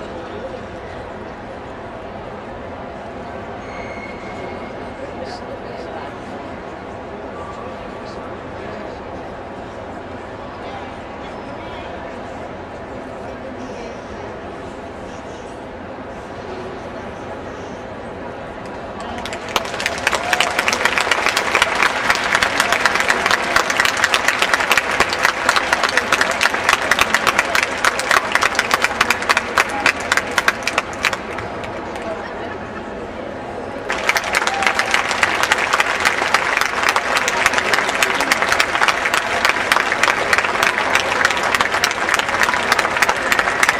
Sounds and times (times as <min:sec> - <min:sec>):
Speech: 0:04.7 - 0:15.3.